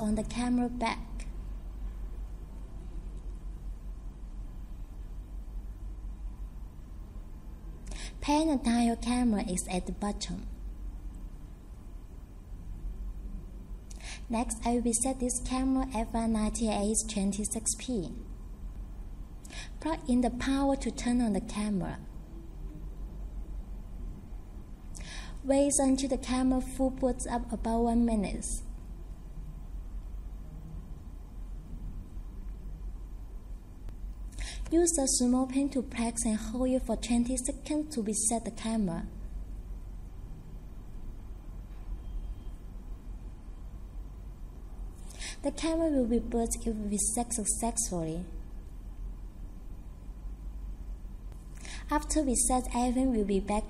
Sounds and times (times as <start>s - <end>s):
Speech: 0.0s - 1.3s, 8.2s - 10.6s, 14.3s - 18.3s, 19.8s - 22.1s, 25.4s - 28.7s, 34.7s - 39.2s, 45.4s - 48.4s, 51.9s - 53.6s.